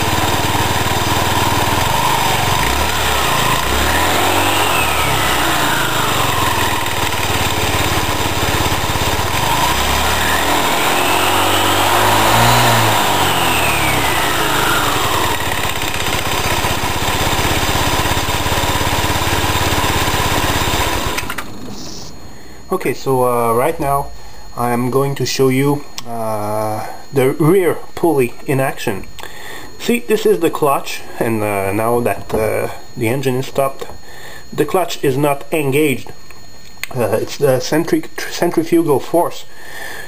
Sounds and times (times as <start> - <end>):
Speech: 21.7 - 29.1, 29.8 - 33.9, 34.6 - 36.2, 36.9 - 39.5.